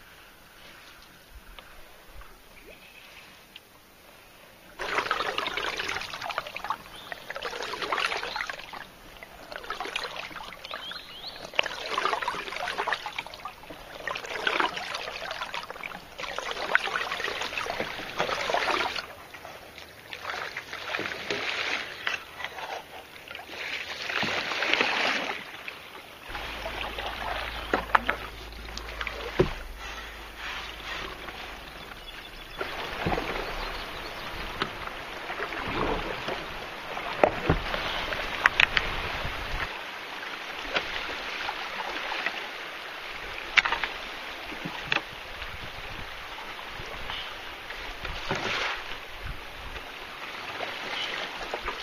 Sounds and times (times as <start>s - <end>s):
Rowboat, canoe, kayak: 0.0s - 51.8s.